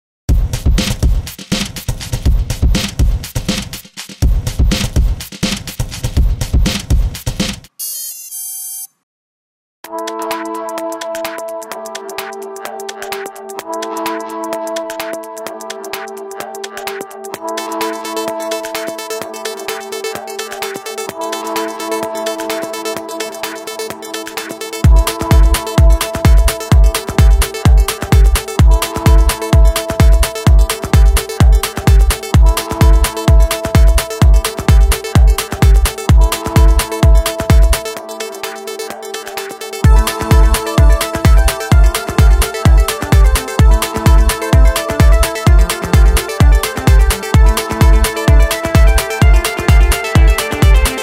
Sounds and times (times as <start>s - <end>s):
Music: 0.3s - 8.0s, 9.8s - 51.0s.